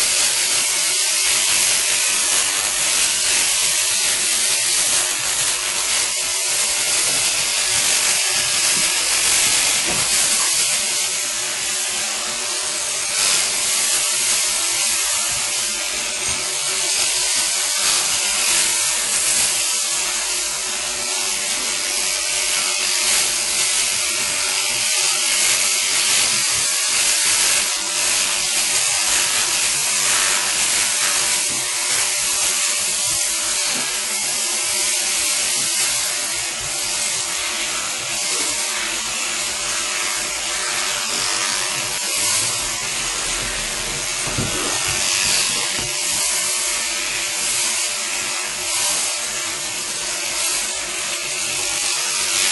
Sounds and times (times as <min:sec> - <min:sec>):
Electric shaver, electric razor: 0:00.0 - 0:52.5.